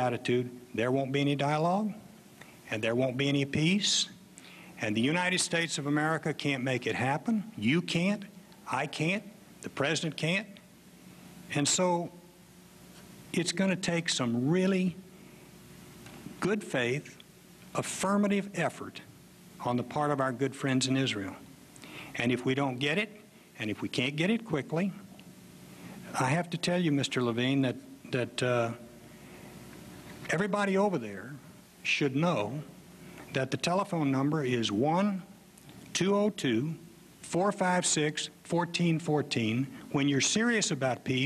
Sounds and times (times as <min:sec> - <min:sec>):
Speech: 0:00.0 - 0:02.1, 0:02.7 - 0:04.2, 0:04.8 - 0:10.7, 0:11.5 - 0:12.2, 0:13.3 - 0:15.0, 0:16.4 - 0:17.2, 0:17.8 - 0:21.5, 0:22.2 - 0:25.1, 0:26.1 - 0:28.9, 0:30.3 - 0:32.7, 0:33.3 - 0:35.4, 0:36.0 - 0:41.2.